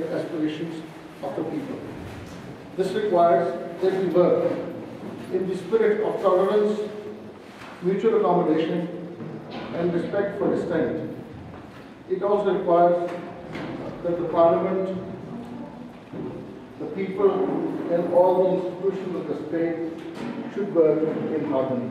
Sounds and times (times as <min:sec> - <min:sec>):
Speech: 0:00.0 - 0:02.0, 0:02.8 - 0:04.7, 0:05.3 - 0:07.0, 0:07.8 - 0:09.0, 0:09.7 - 0:11.1, 0:12.1 - 0:13.3, 0:13.9 - 0:15.8, 0:16.8 - 0:21.9.